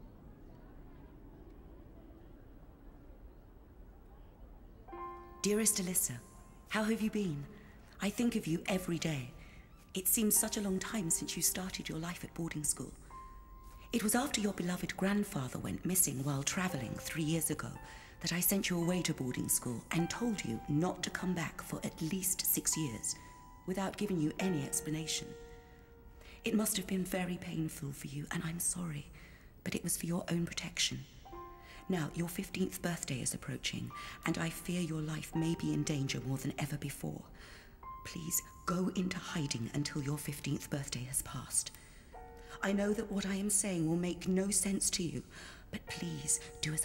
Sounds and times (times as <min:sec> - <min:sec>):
Music: 0:00.0 - 0:46.8
Speech: 0:05.4 - 0:09.4, 0:10.0 - 0:13.0, 0:14.0 - 0:25.4, 0:26.4 - 0:31.1, 0:31.9 - 0:37.3, 0:38.0 - 0:41.7, 0:42.6 - 0:46.8.